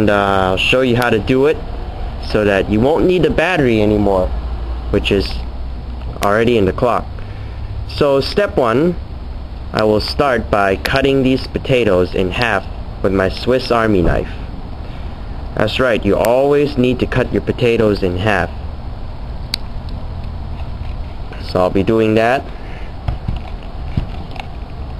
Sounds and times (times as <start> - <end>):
Speech: 0.0 - 1.6, 2.2 - 4.3, 4.9 - 5.5, 6.2 - 7.1, 7.9 - 9.0, 9.7 - 14.4, 15.6 - 18.6, 21.4 - 22.5.